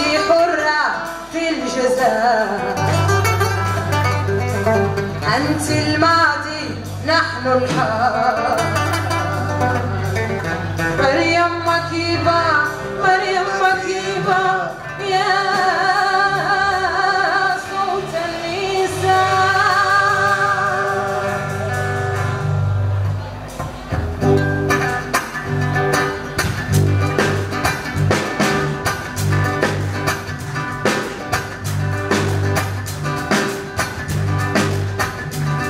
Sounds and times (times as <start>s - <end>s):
Music: 0.0s - 35.6s.